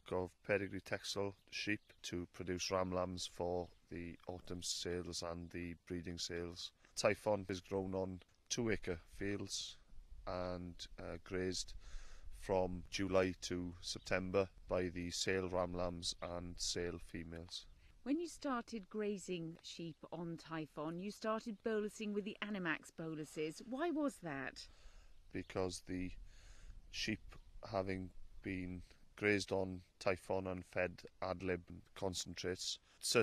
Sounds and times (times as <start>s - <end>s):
Speech: 0.0s - 11.7s, 12.4s - 24.6s, 25.3s - 26.2s, 26.9s - 33.2s.